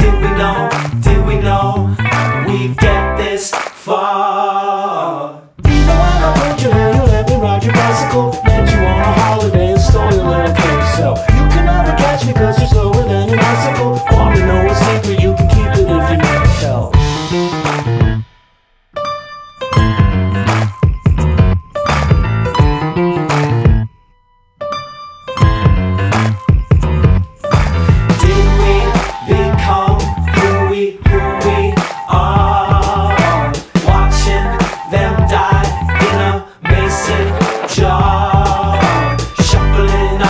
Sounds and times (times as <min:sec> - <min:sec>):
Music: 0:00.0 - 0:03.8, 0:05.6 - 0:40.2.